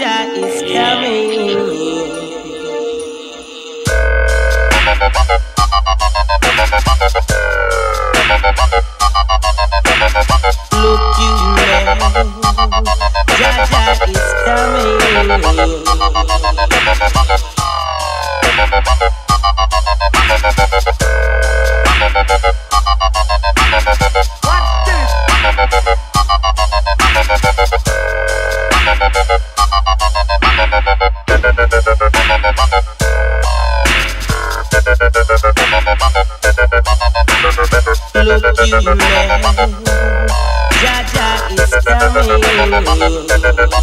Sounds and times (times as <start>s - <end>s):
Electronic music: 0.0s - 43.8s
Sound effect: 30.4s - 43.8s.